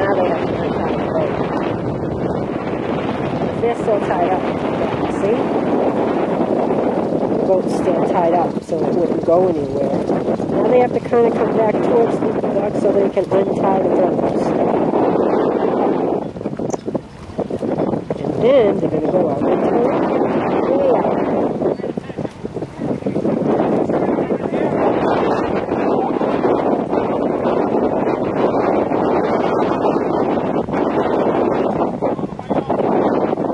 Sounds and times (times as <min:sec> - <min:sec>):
Speech: 0:03.6 - 0:04.4, 0:05.1 - 0:05.4, 0:07.5 - 0:10.0, 0:10.6 - 0:14.5, 0:18.2 - 0:19.9.